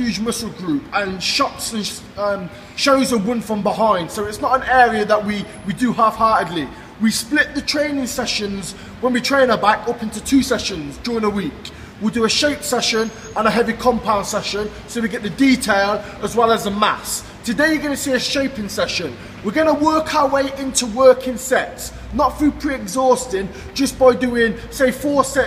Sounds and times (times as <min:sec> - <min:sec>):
Speech: 0:00.0 - 0:25.4.